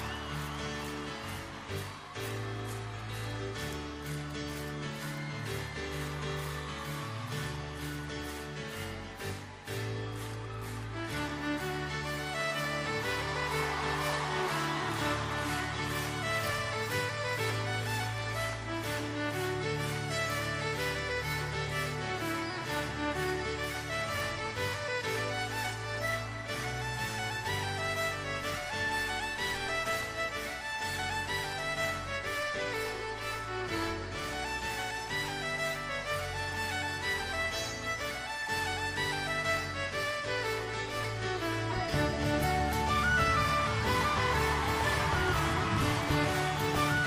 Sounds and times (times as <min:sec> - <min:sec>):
Music: 0:00.0 - 0:47.0.